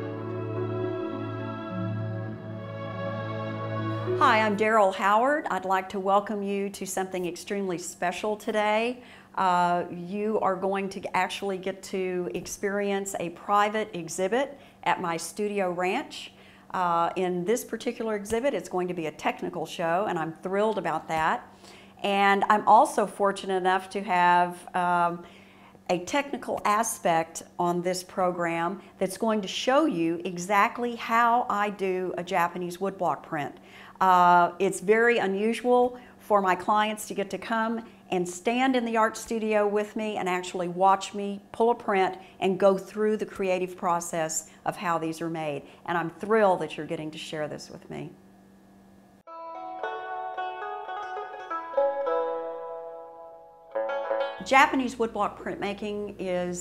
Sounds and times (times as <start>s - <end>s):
Speech: 4.2s - 25.3s, 25.9s - 48.2s, 54.5s - 56.6s.